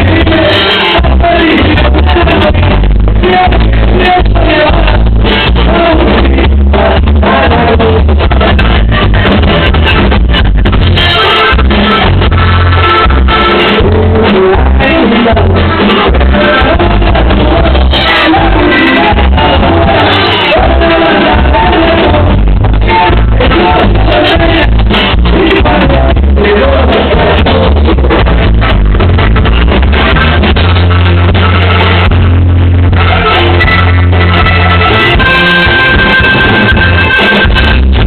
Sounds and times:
Music: 0.0s - 38.0s.

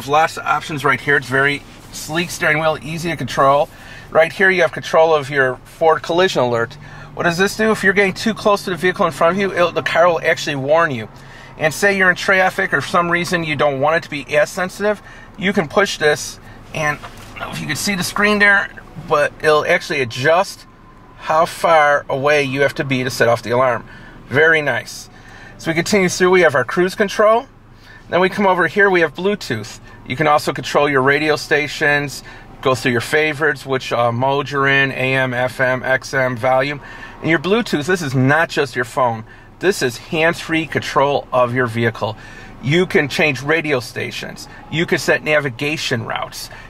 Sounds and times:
Speech: 0.0s - 27.5s, 28.1s - 46.6s
Car: 0.0s - 46.6s.

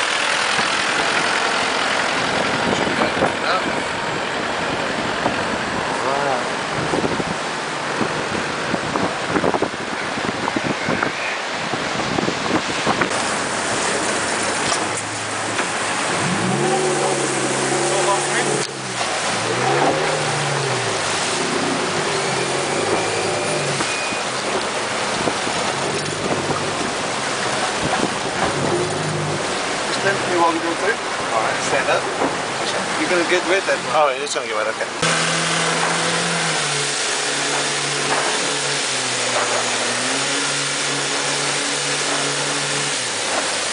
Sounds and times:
Motorboat, speedboat: 0.0s - 43.7s
Speech: 3.0s - 3.8s, 6.0s - 6.5s, 17.9s - 18.6s, 30.0s - 35.0s.

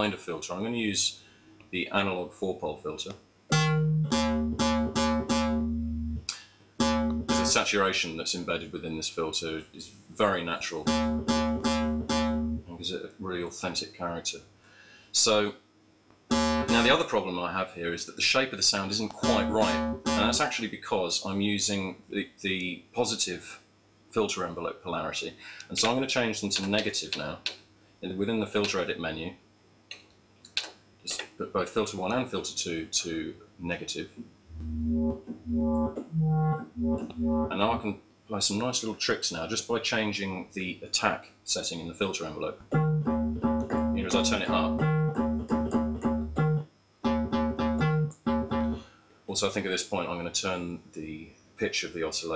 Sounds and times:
Synthesizer: 3.6s - 6.2s, 6.8s - 7.6s, 10.9s - 12.6s, 16.3s - 17.0s, 19.2s - 20.5s, 34.6s - 37.6s.

